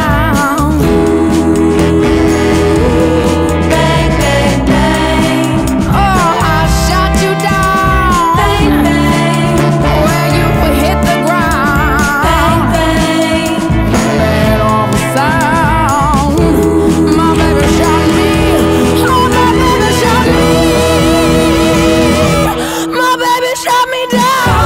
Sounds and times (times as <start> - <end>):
Music: 0.0 - 24.6.